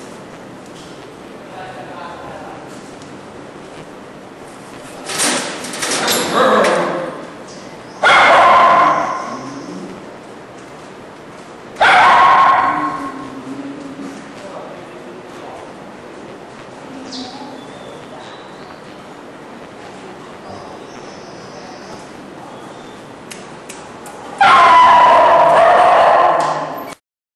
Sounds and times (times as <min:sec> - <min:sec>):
Yip: 0:08.0 - 0:09.5, 0:11.8 - 0:13.2, 0:24.4 - 0:27.0
Bow-wow: 0:08.0 - 0:09.8, 0:11.8 - 0:13.5, 0:24.4 - 0:27.0.